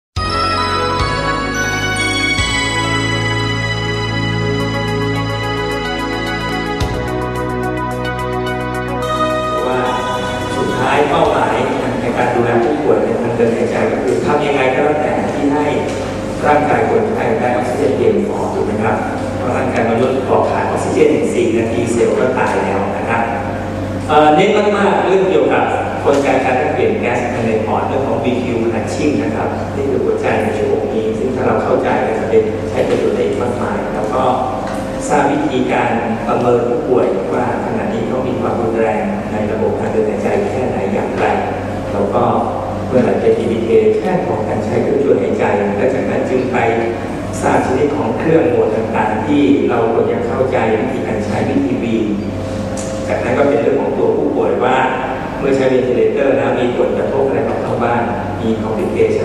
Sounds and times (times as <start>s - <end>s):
Background music: 0.2s - 15.0s.